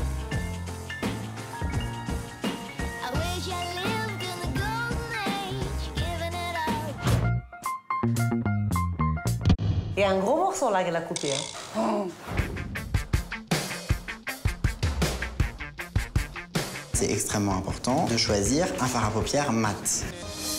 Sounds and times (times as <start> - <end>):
Music: 0.0 - 10.5, 12.1 - 20.5.